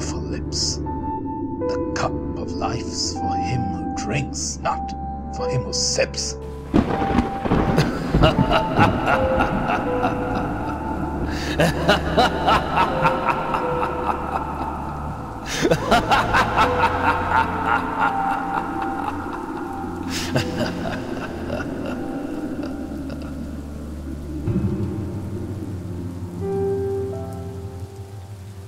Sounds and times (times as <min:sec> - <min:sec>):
Music: 0:00.0 - 0:28.6.